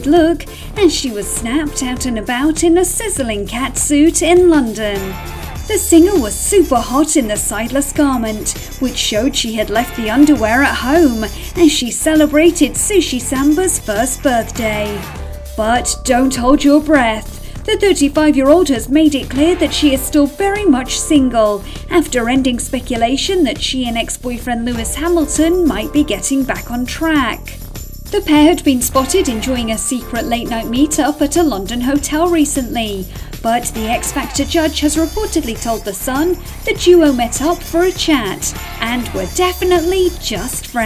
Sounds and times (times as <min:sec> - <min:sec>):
Speech: 0:00.0 - 0:27.6, 0:28.2 - 0:40.8
Music: 0:00.0 - 0:40.8.